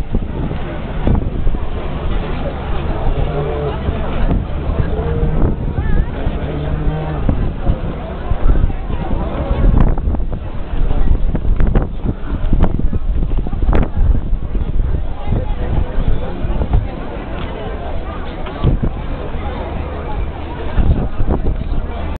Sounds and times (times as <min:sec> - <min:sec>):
Speech: 0:00.0 - 0:22.1.